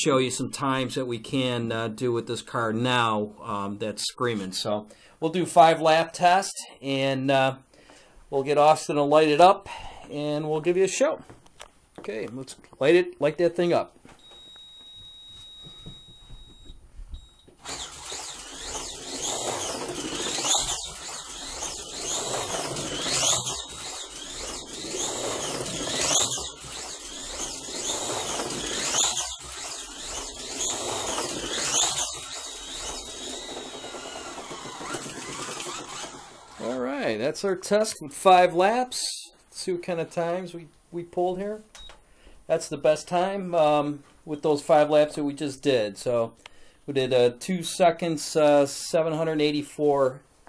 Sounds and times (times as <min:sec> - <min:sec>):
Speech: 0:00.0 - 0:07.6, 0:08.3 - 0:11.2, 0:12.0 - 0:14.0, 0:36.6 - 0:41.7, 0:42.5 - 0:50.2.